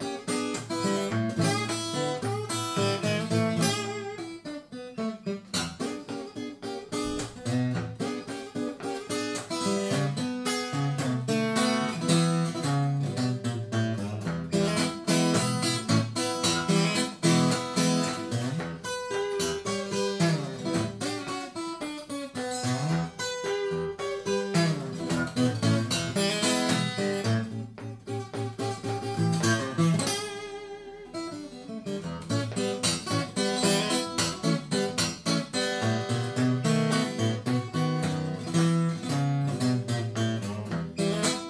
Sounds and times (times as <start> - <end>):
Acoustic guitar: 0.0 - 41.5.